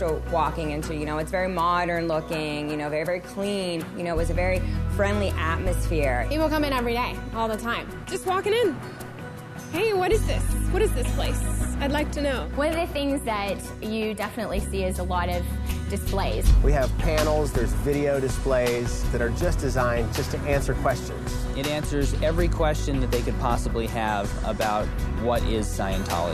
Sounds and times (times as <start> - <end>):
Music: 0.0 - 26.3.